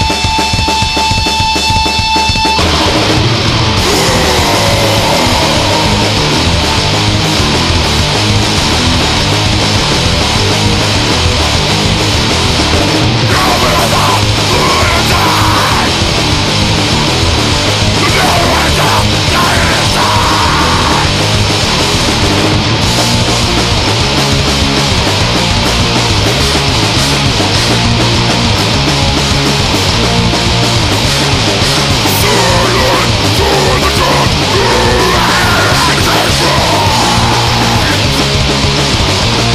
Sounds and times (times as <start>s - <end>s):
Music: 0.0s - 39.5s.